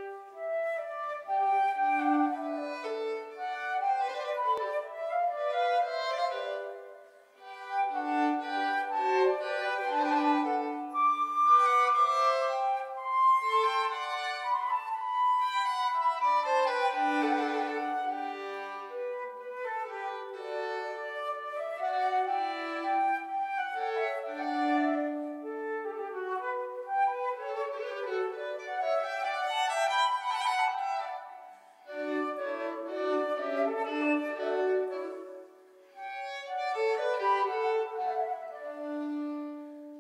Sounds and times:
Violin, fiddle: 0.0s - 40.0s.

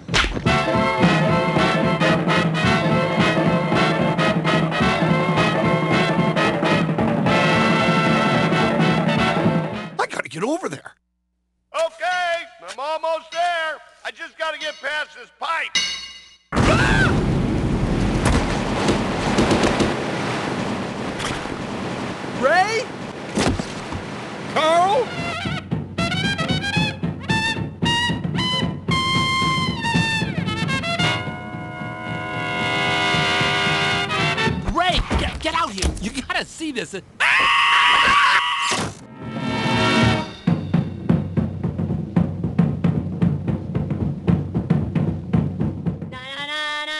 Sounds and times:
Music: 0.0s - 10.0s, 25.0s - 34.7s, 39.1s - 46.9s
Speech: 10.0s - 11.0s, 11.7s - 15.8s, 22.4s - 22.9s, 24.6s - 25.1s, 34.6s - 37.0s.

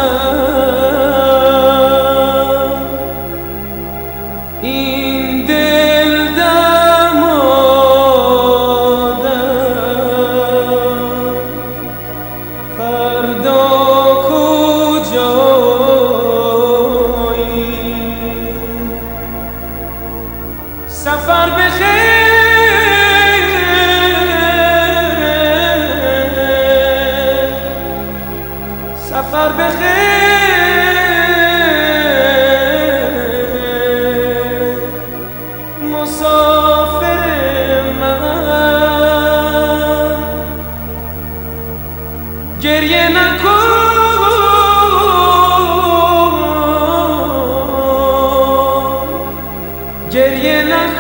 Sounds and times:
Chant: 0.0s - 51.0s.

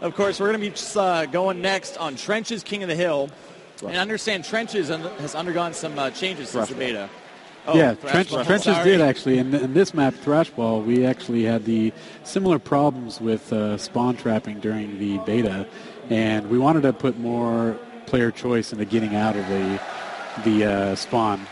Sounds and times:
Speech: 0.0s - 7.1s, 7.7s - 19.8s, 20.4s - 21.5s.

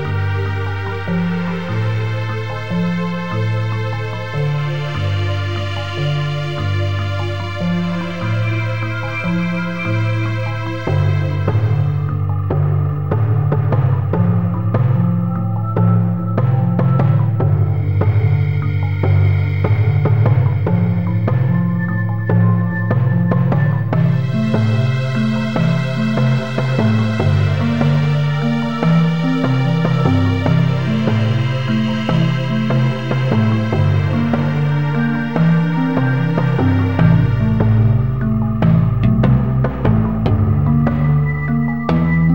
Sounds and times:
Music: 0.0s - 42.3s.

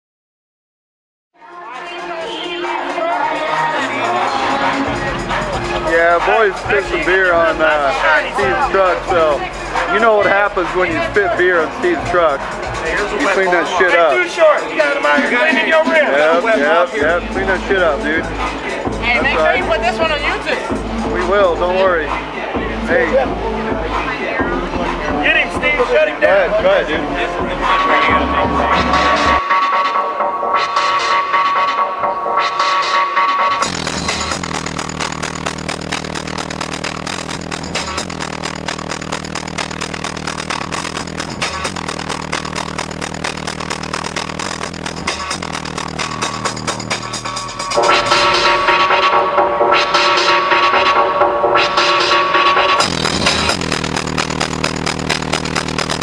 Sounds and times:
Music: 1.4s - 56.0s
Speech: 4.9s - 28.4s.

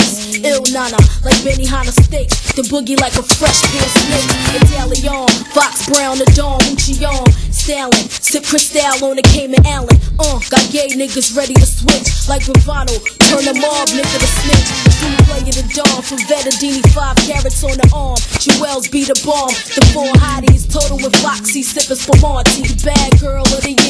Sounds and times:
Music: 0.0s - 23.8s.

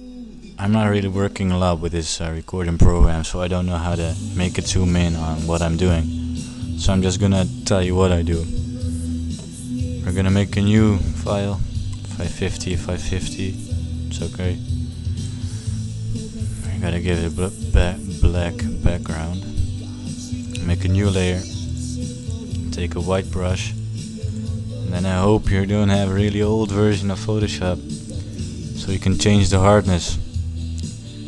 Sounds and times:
Music: 0.0s - 31.2s
Speech: 0.5s - 6.1s, 6.8s - 8.7s, 10.0s - 14.6s, 16.5s - 19.6s, 20.5s - 21.7s, 22.7s - 23.8s, 24.9s - 27.8s, 28.8s - 30.3s.

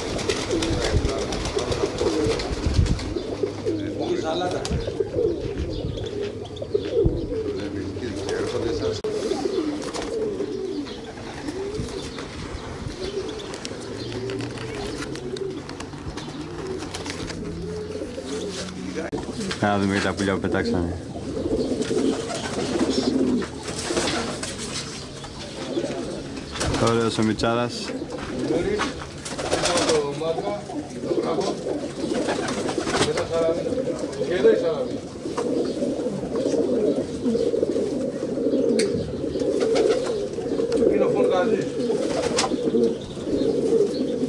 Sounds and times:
Coo: 0.0s - 26.4s, 27.8s - 44.2s
Speech: 0.6s - 2.1s, 3.8s - 4.9s, 7.5s - 9.1s, 18.6s - 21.0s, 25.7s - 31.7s, 33.0s - 35.0s, 40.9s - 41.8s.

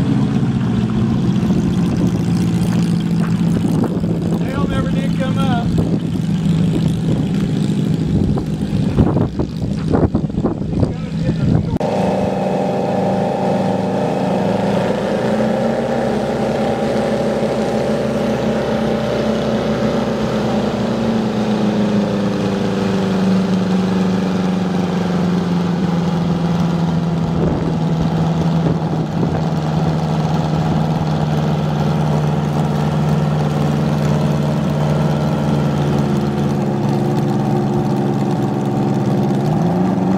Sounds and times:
Fixed-wing aircraft, airplane: 0.0s - 40.1s
Speech: 4.4s - 5.8s, 10.7s - 11.8s.

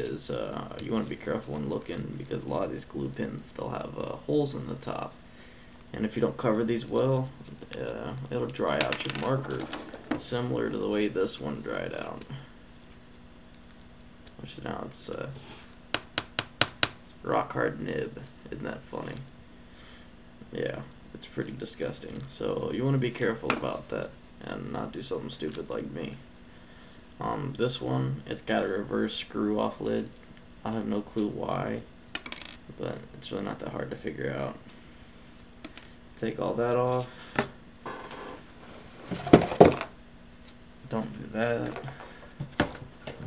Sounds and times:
Speech: 0.0s - 5.2s, 5.9s - 12.5s, 14.4s - 15.4s, 17.2s - 19.3s, 20.4s - 26.2s, 27.2s - 31.9s, 32.7s - 34.6s, 36.2s - 37.1s, 40.8s - 42.0s.

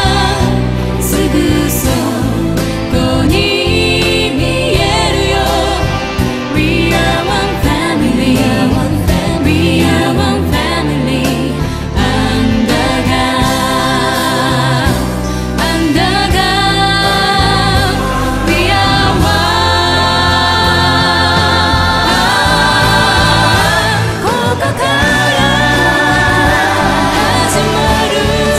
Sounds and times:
Music: 0.0s - 28.5s
Singing: 0.0s - 28.5s.

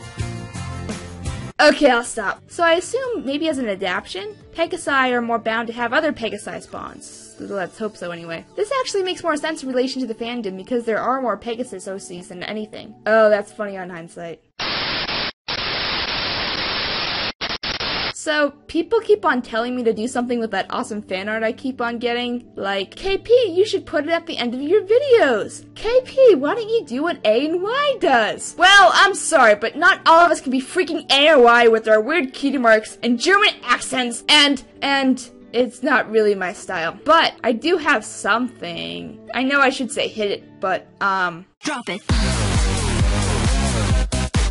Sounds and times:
Narration, monologue: 1.6s - 14.5s, 18.2s - 42.1s.

